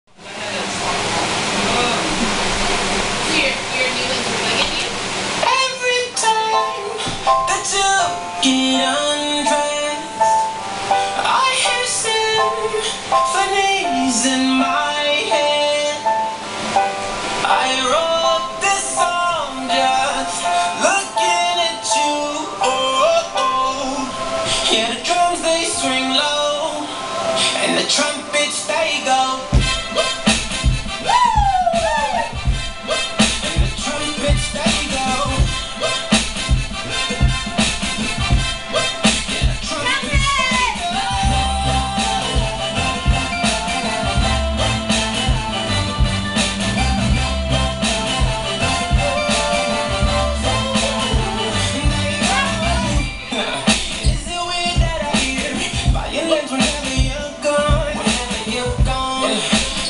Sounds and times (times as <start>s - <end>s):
Speech: 3.3s - 4.9s
Music: 5.4s - 59.8s.